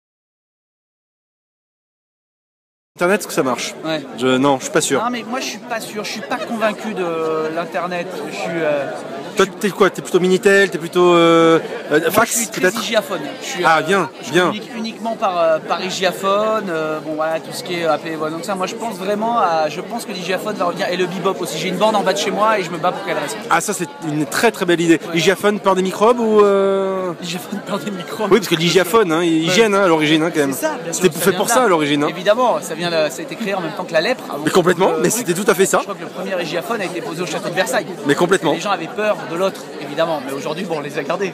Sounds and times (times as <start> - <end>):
Speech: 3.0 - 41.3.